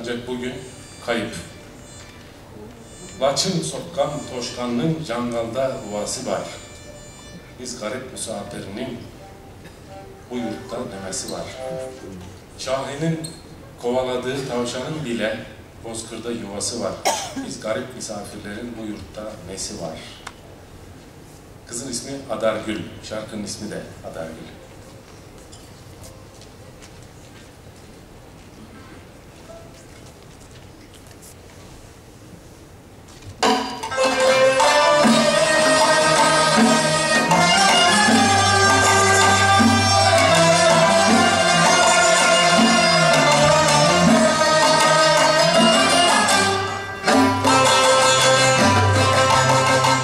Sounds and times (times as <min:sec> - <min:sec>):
Music: 0:00.0 - 0:12.1, 0:33.4 - 0:50.0
Speech: 0:07.6 - 0:09.1, 0:10.3 - 0:20.2, 0:21.7 - 0:24.6.